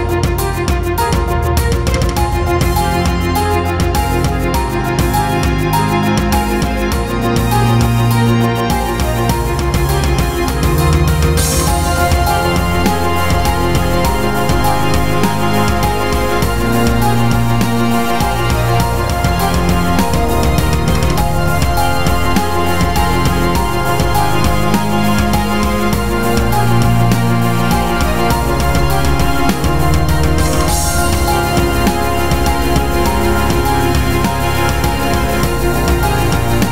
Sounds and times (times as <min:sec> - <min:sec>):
Music: 0:00.0 - 0:36.7.